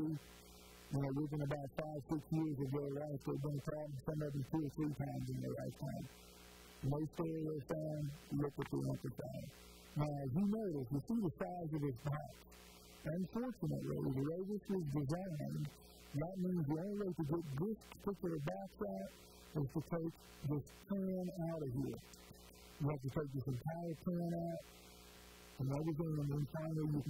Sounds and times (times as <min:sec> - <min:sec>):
Speech: 0:00.0 - 0:00.2, 0:00.9 - 0:06.1, 0:06.8 - 0:12.4, 0:13.0 - 0:22.1, 0:22.8 - 0:24.7, 0:25.6 - 0:27.0.